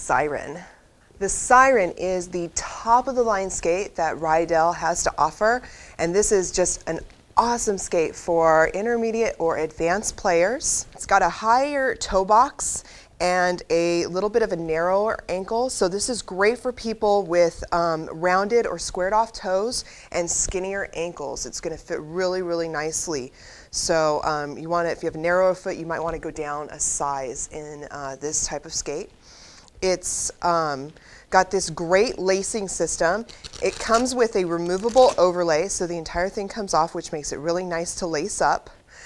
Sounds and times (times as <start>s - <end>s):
Speech: 0.0s - 29.2s, 29.8s - 38.8s.